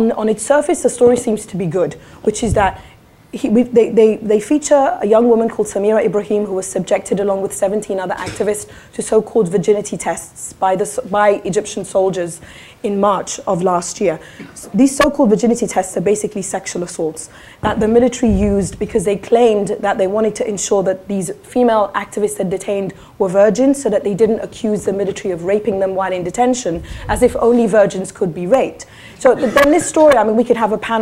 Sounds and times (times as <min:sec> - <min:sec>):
Speech: 0:00.0 - 0:02.8, 0:03.4 - 0:31.0.